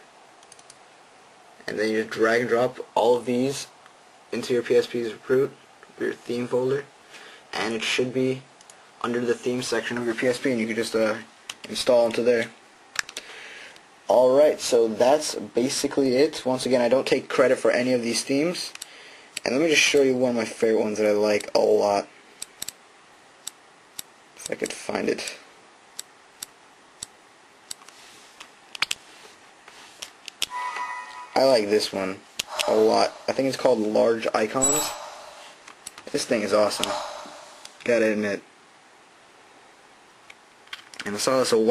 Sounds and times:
Speech: 1.6 - 6.9, 7.5 - 12.6, 14.1 - 18.8, 19.4 - 22.1, 24.4 - 25.5, 31.4 - 35.0, 36.0 - 37.1, 37.8 - 38.5, 41.0 - 41.7.

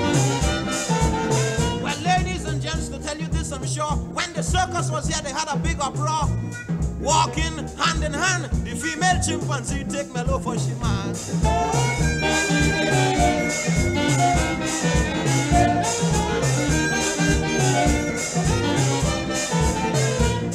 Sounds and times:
Swing music: 0.0 - 20.5.

